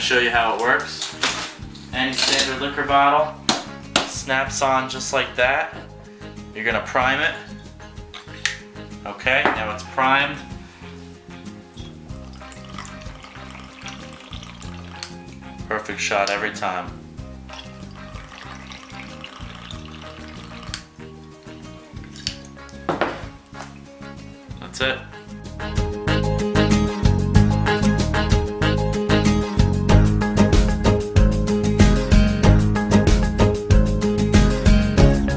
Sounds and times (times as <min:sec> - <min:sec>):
Speech: 0:00.0 - 0:01.1, 0:02.0 - 0:03.3, 0:04.2 - 0:05.8, 0:06.6 - 0:07.5, 0:09.0 - 0:10.4, 0:15.7 - 0:17.0, 0:24.6 - 0:25.1
Music: 0:00.0 - 0:35.3.